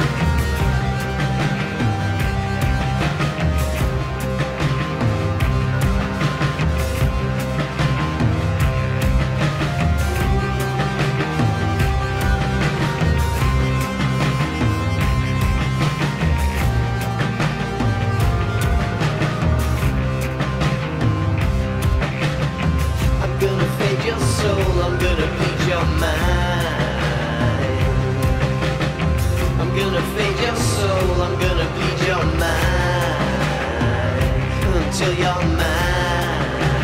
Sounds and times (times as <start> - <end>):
Music: 0.0 - 36.8.